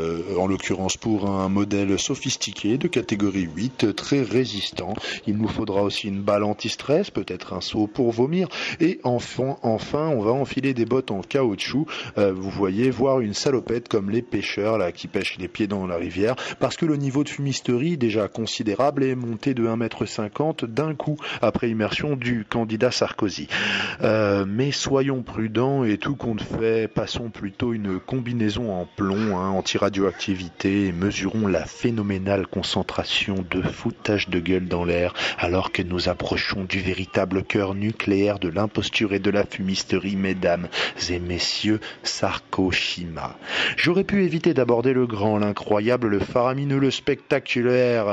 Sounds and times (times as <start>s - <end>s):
Speech: 0.0s - 48.1s.